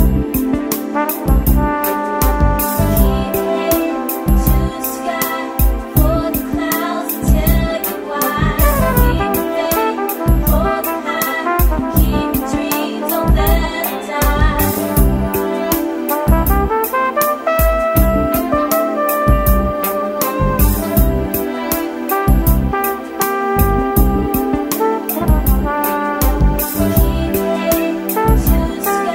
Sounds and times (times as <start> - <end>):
Rhythm and blues: 0.0 - 29.1.